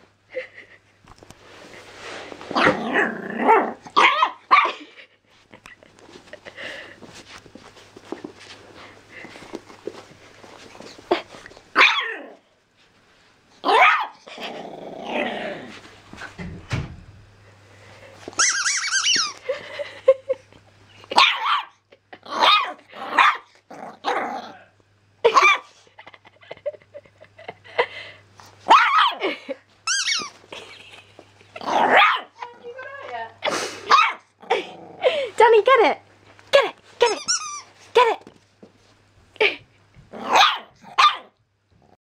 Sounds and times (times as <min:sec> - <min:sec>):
Bark: 0:04.0 - 0:04.8, 0:11.8 - 0:12.1, 0:13.7 - 0:14.2, 0:21.2 - 0:21.8, 0:22.4 - 0:23.5, 0:25.3 - 0:25.7, 0:28.7 - 0:29.2, 0:31.9 - 0:32.4, 0:33.9 - 0:34.3, 0:40.3 - 0:41.3
Speech: 0:32.4 - 0:33.4, 0:35.4 - 0:36.0, 0:38.0 - 0:38.3.